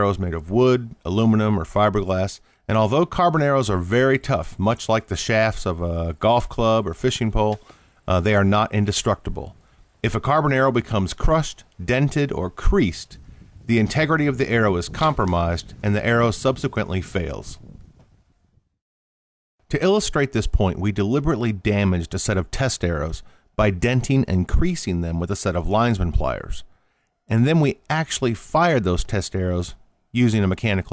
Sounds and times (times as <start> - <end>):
Speech: 0.0 - 17.6, 19.7 - 26.7, 27.3 - 30.9.